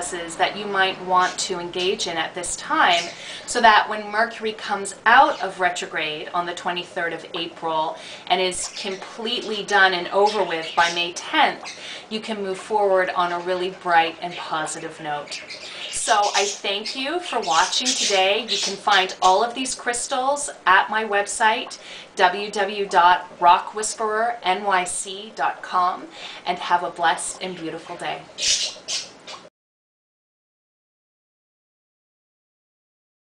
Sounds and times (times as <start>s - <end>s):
Speech: 0.0s - 15.4s, 16.0s - 28.3s
Inside, small room: 0.0s - 29.5s.